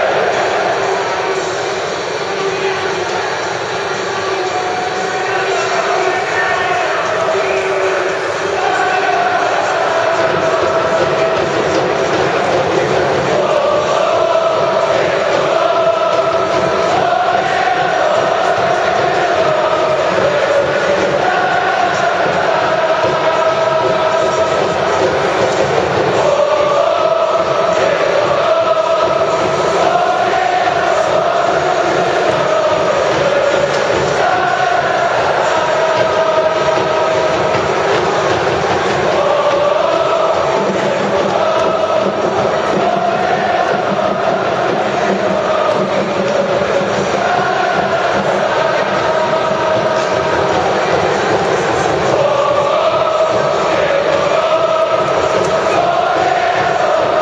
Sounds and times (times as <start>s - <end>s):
Chant: 0.0s - 57.2s
Crowd: 0.0s - 57.2s.